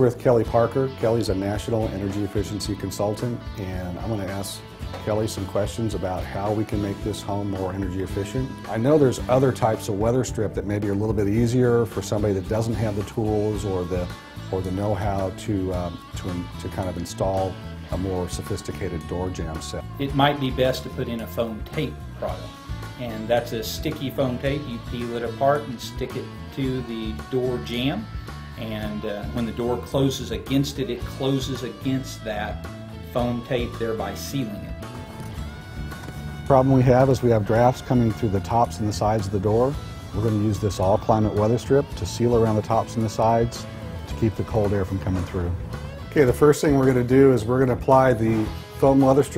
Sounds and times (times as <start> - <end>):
Speech: 0.0 - 28.0, 28.6 - 34.7, 36.5 - 49.3
Music: 0.0 - 49.3.